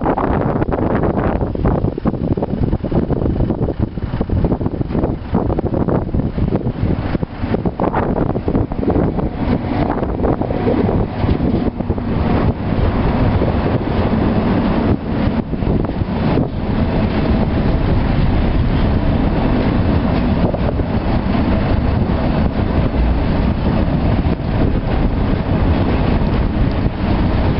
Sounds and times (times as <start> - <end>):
Vehicle: 0.0 - 27.6.